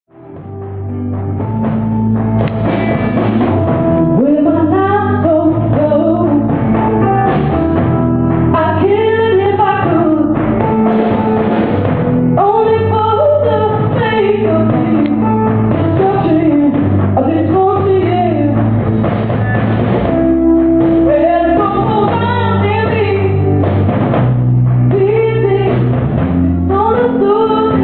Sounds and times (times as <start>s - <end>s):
Music: 0.1s - 27.8s.